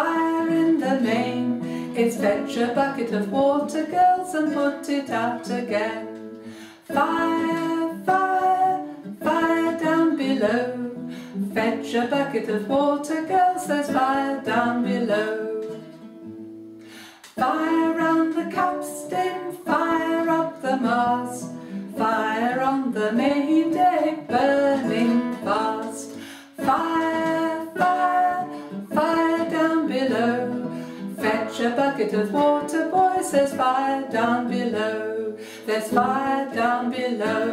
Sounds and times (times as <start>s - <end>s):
Female singing: 0.0s - 15.9s, 17.3s - 37.5s
Music: 0.0s - 37.5s.